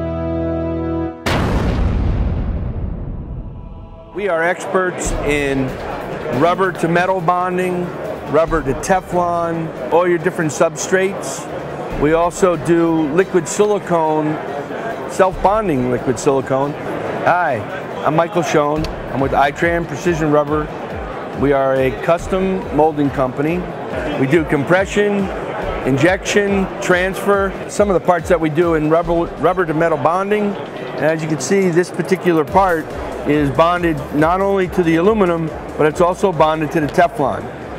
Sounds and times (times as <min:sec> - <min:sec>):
Music: 0:00.0 - 0:37.7
Speech: 0:04.2 - 0:14.4, 0:15.1 - 0:20.7, 0:21.4 - 0:37.5.